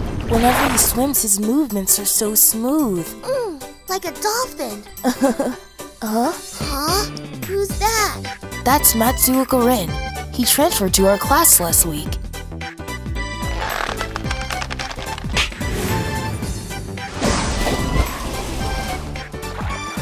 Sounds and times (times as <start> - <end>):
Speech: 0.3 - 4.8, 6.0 - 12.2
Music: 0.7 - 20.0.